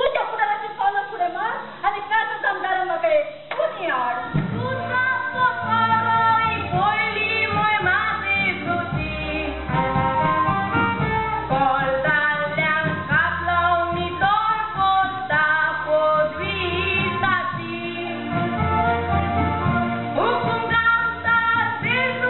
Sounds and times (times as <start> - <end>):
Speech: 0.0 - 5.4
Inside, large room or hall: 0.0 - 22.2
Music: 4.2 - 22.2.